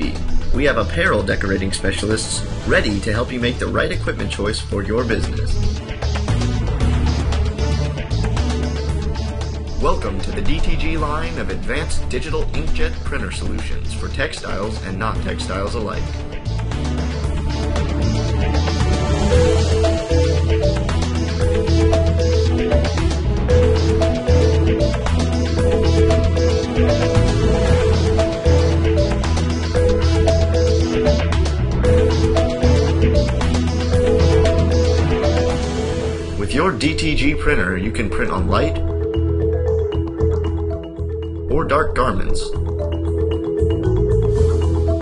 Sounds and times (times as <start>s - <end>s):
Speech: 0.0s - 5.6s, 9.8s - 16.2s, 36.4s - 38.9s, 41.5s - 42.6s
Music: 0.0s - 45.0s.